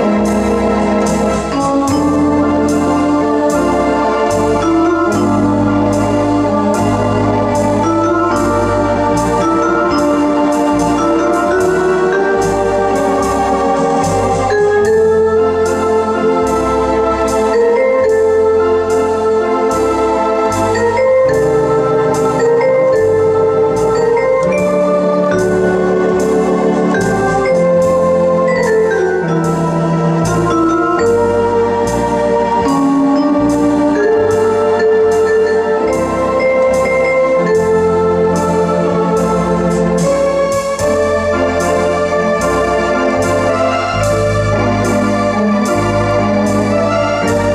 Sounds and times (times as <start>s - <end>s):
Electronic organ: 0.0s - 47.5s.